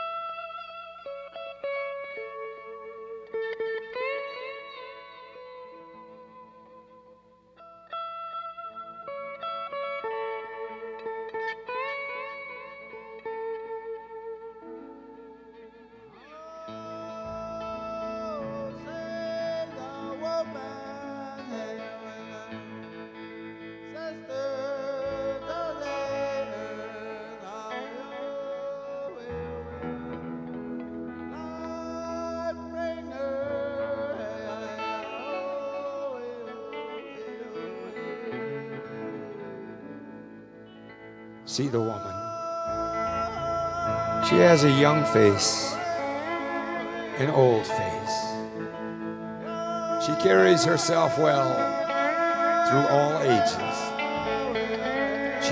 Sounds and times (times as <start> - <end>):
Music: 0.0 - 55.5.